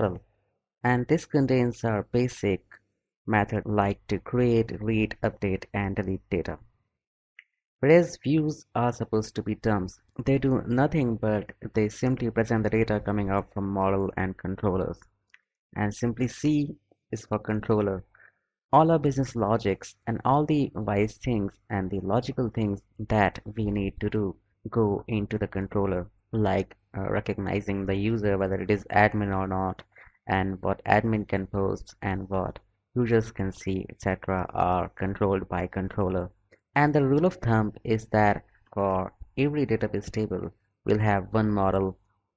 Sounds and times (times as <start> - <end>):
Speech: 0.0 - 0.2, 0.9 - 6.6, 7.8 - 15.0, 15.8 - 18.2, 18.8 - 42.0.